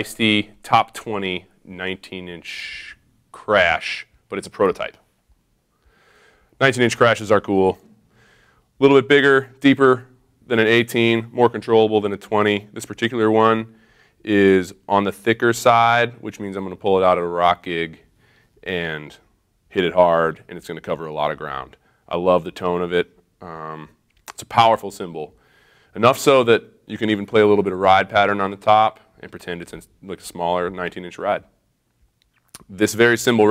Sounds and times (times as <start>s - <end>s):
Speech: 0.0s - 5.0s, 6.6s - 7.8s, 8.8s - 18.0s, 18.6s - 25.4s, 26.0s - 31.6s, 32.6s - 33.5s.